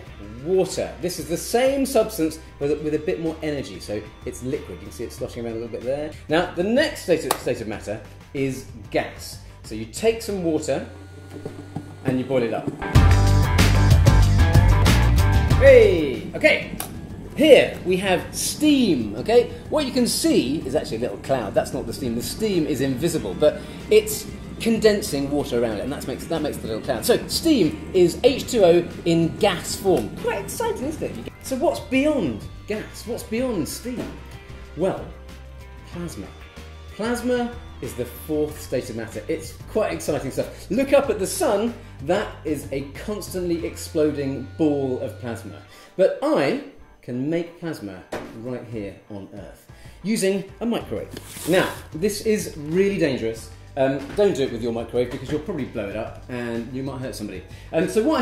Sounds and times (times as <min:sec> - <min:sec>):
Speech: 0:00.0 - 0:11.0, 0:12.0 - 0:12.8, 0:15.5 - 0:16.8, 0:17.4 - 0:34.2, 0:34.8 - 0:35.2, 0:35.8 - 0:36.4, 0:37.0 - 0:58.2
Music: 0:00.0 - 0:58.2.